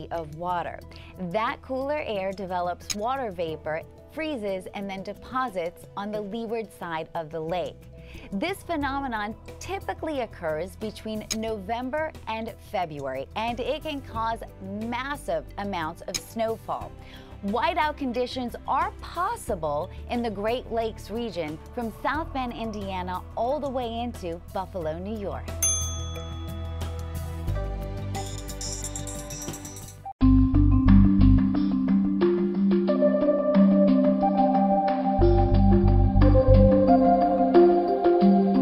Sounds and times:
New-age music: 25.0s - 38.6s.

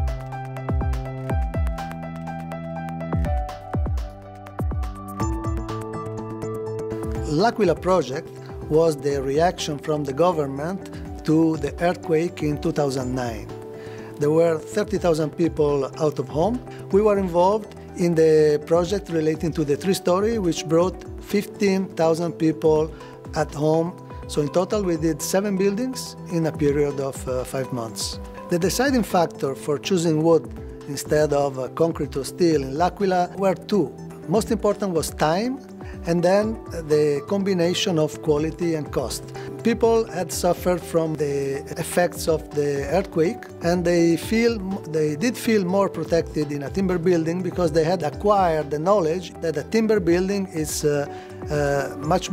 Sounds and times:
Music: 0.0s - 52.3s
Speech: 7.3s - 13.5s, 14.2s - 52.3s.

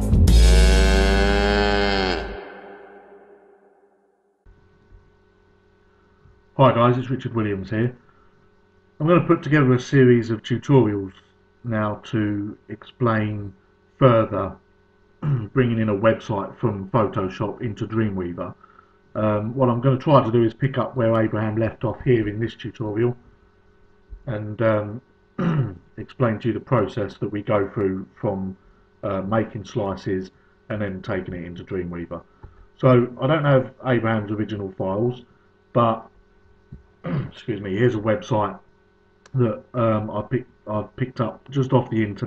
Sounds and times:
Speech: 6.6s - 8.0s, 9.0s - 14.6s, 15.2s - 18.6s, 19.2s - 23.2s, 24.3s - 36.1s, 37.1s - 38.7s, 39.3s - 42.2s.

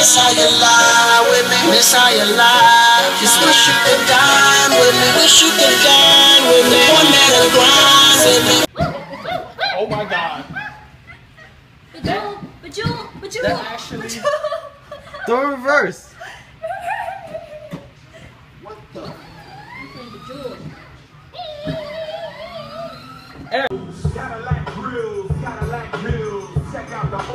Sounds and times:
Music: 0.0s - 8.7s, 23.7s - 27.3s.

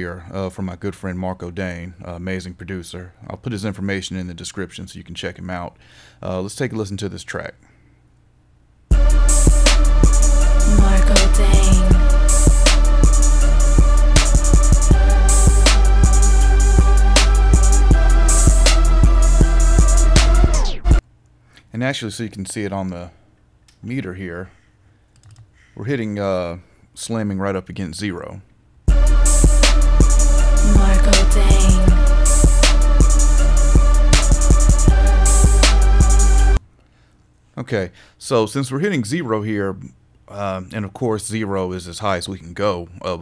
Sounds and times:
Speech: 0.0s - 7.6s, 21.7s - 23.2s, 23.8s - 24.6s, 25.8s - 28.5s, 37.6s - 43.2s
Hip hop music: 8.9s - 21.0s, 28.9s - 36.6s.

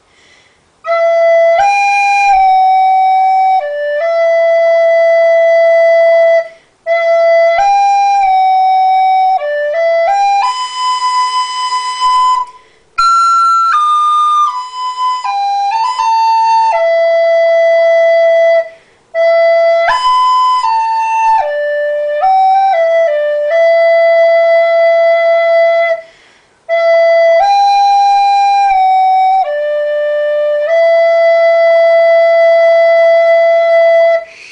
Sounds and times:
Flute: 0.8s - 34.5s.

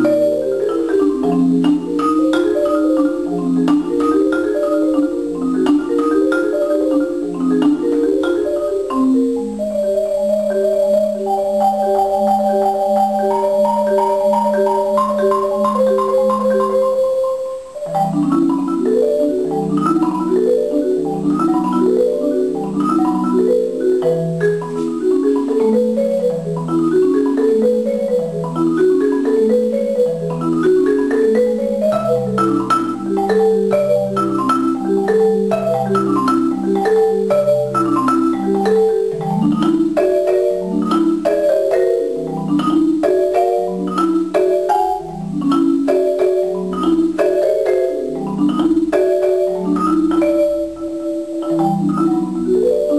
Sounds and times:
Marimba, xylophone: 0.0s - 52.9s.

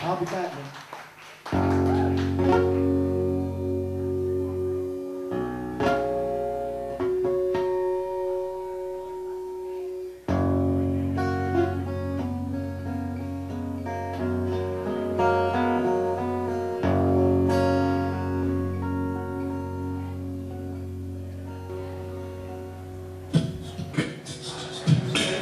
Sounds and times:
Acoustic guitar: 1.5s - 25.4s
Strum: 1.6s - 25.4s.

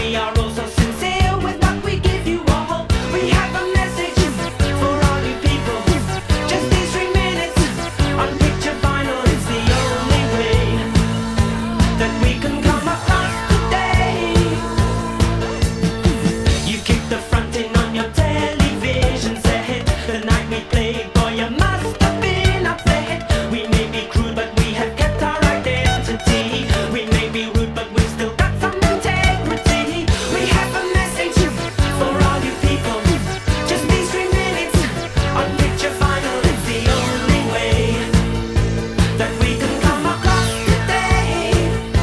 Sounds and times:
Theme music: 0.8s - 19.6s, 28.6s - 42.0s.

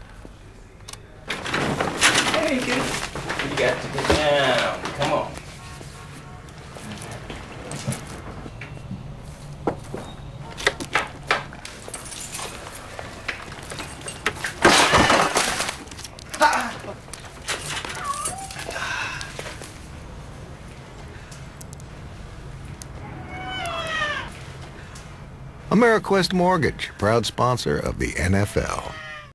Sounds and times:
Meow: 17.9s - 18.6s, 23.0s - 24.3s, 28.5s - 29.3s
Caterwaul: 23.0s - 24.3s, 28.5s - 29.3s
Speech: 25.7s - 29.0s.

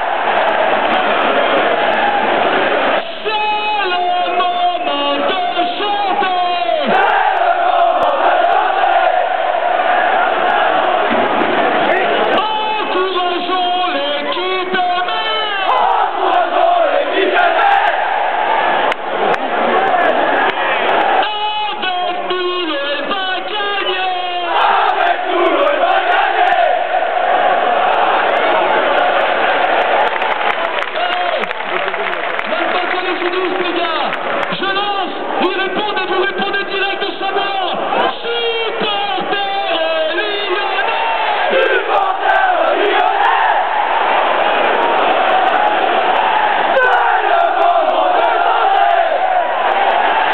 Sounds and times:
Speech: 3.2s - 7.0s, 11.9s - 15.8s, 21.2s - 24.7s, 32.4s - 41.2s.

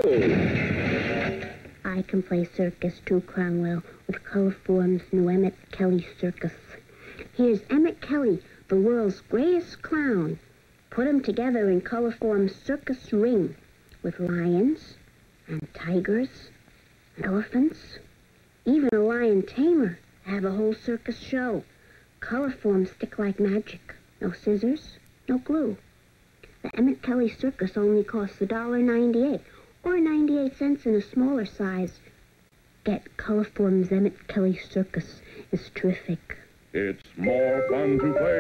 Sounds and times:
Speech: 1.8s - 16.6s, 17.2s - 25.8s, 26.5s - 32.1s, 32.8s - 38.4s.

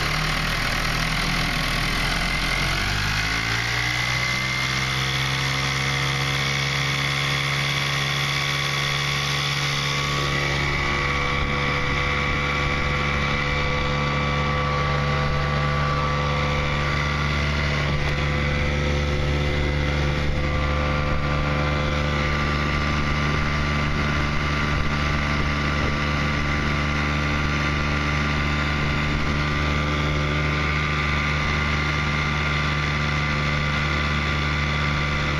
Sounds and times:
Motorboat, speedboat: 0.0s - 35.3s.

